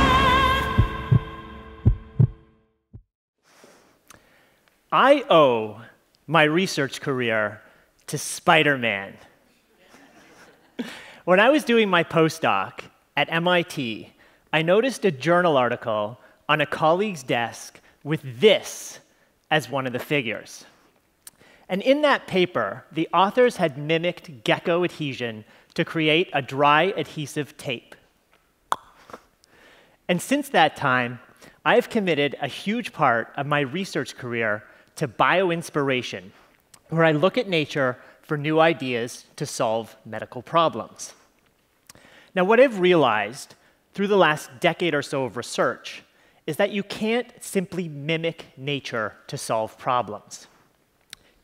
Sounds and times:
Speech: 4.9s - 9.4s, 11.3s - 20.7s, 21.7s - 28.0s, 30.1s - 41.2s, 42.4s - 50.5s.

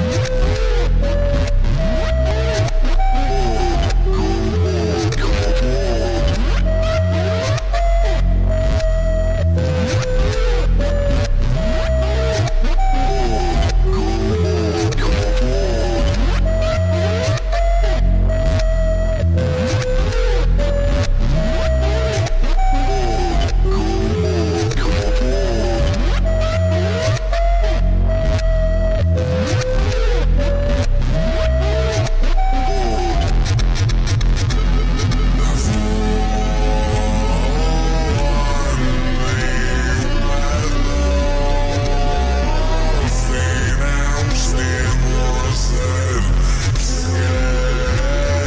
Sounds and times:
Music: 0.0s - 48.4s.

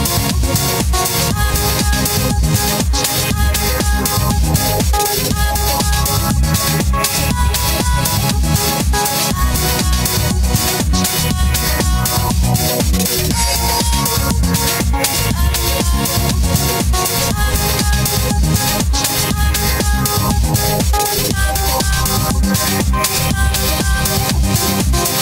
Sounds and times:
Disco: 0.0s - 25.2s.

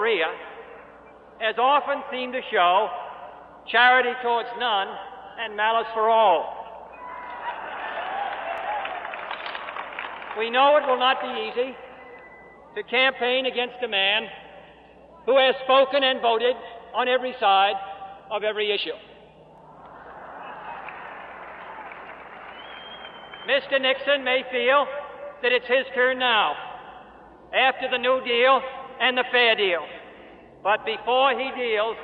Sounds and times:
Male speech, man speaking: 0.0s - 0.5s, 1.4s - 3.1s, 3.7s - 6.6s, 10.4s - 11.8s, 12.8s - 14.4s, 15.3s - 19.1s, 23.5s - 26.8s, 27.6s - 30.0s, 30.6s - 32.0s.

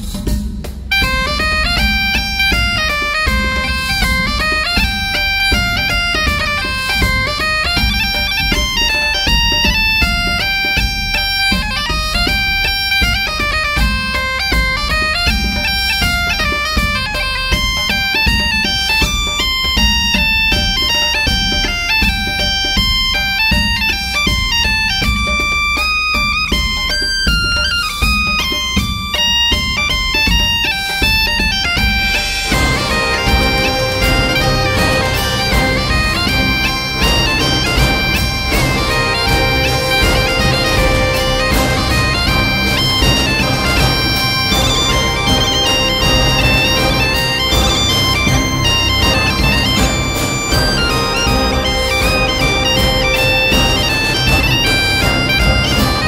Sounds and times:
Bagpipes: 0.0s - 56.0s
Wind instrument, woodwind instrument: 0.0s - 56.0s.

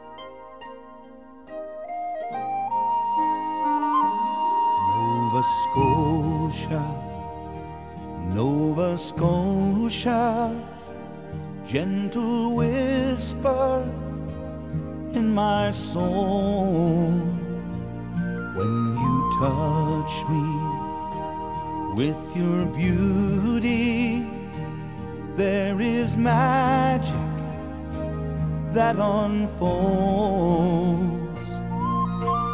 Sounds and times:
Music: 0.0s - 32.5s.

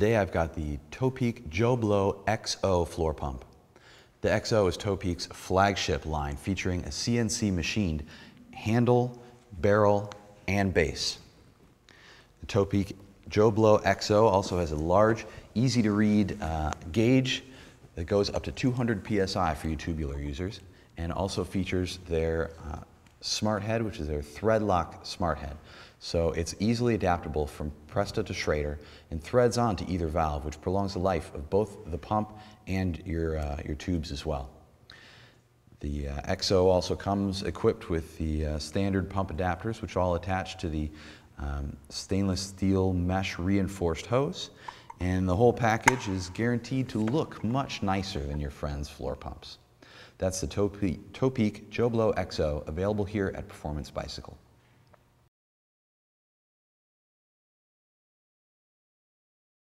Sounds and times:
Speech: 0.0s - 3.5s, 4.2s - 11.3s, 12.4s - 34.6s, 35.8s - 54.4s.

